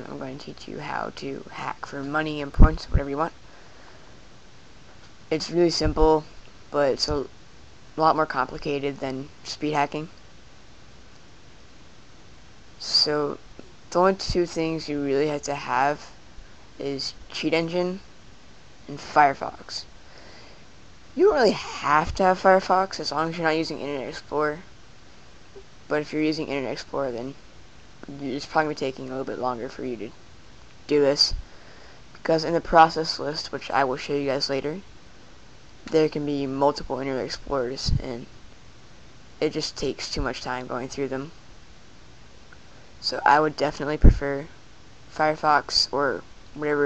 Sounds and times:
Speech: 0.0 - 3.4, 5.3 - 7.3, 8.0 - 10.1, 12.8 - 16.1, 16.8 - 18.0, 18.9 - 19.9, 21.2 - 24.6, 25.9 - 27.4, 28.0 - 30.2, 30.9 - 31.4, 32.2 - 34.8, 35.9 - 38.3, 39.4 - 41.4, 43.0 - 44.5, 45.1 - 46.8.

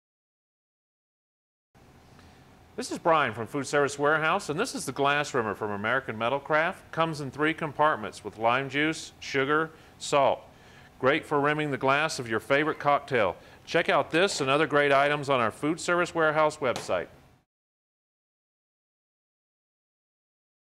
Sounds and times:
Speech: 2.8 - 17.2.

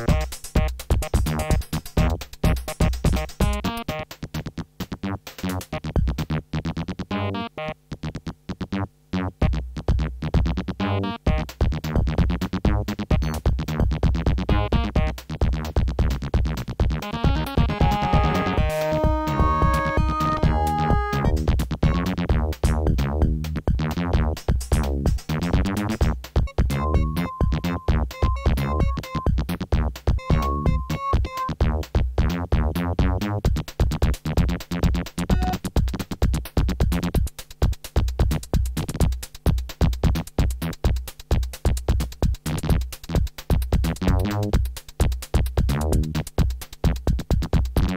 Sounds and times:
Jingle (music): 17.1 - 21.5, 26.5 - 29.3, 30.2 - 31.5.

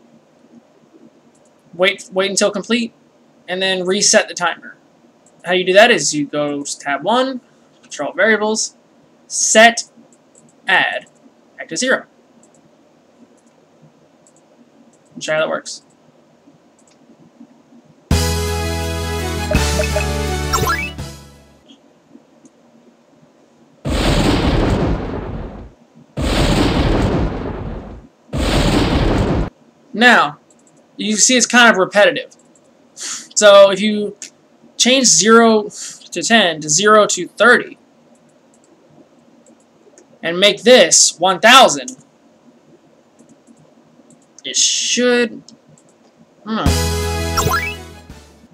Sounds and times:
Speech: 1.8 - 4.8, 5.4 - 9.9, 10.7 - 12.1, 15.2 - 15.9, 30.0 - 30.4, 31.0 - 32.3, 33.4 - 37.8, 40.2 - 42.0, 44.4 - 45.5, 46.5 - 46.7.

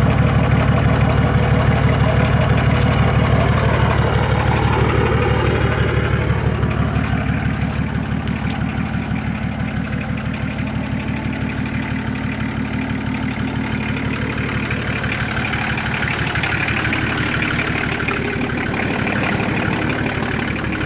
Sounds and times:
Walk, footsteps: 2.7 - 17.7.

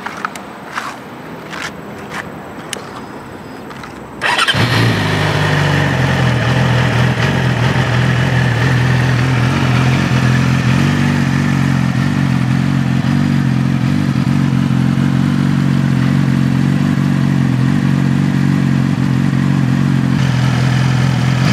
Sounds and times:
Vehicle: 0.0 - 21.5
Medium engine (mid frequency): 3.7 - 21.5
Accelerating, revving, vroom: 4.3 - 7.5.

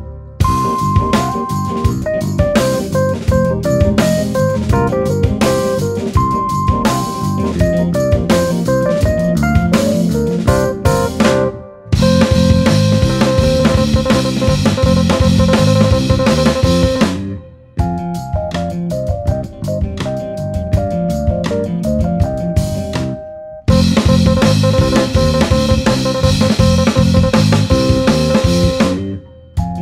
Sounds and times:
Music: 0.0 - 29.8.

